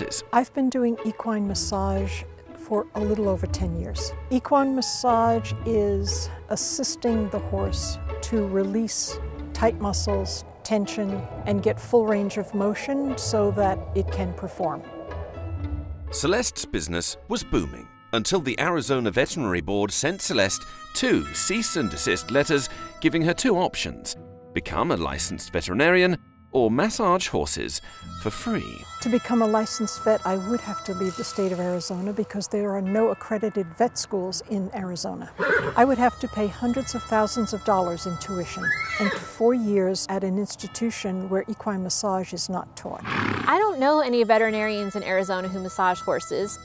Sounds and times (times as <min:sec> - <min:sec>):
Speech: 0:00.0 - 0:14.8, 0:16.2 - 0:46.6
Music: 0:00.0 - 0:46.6.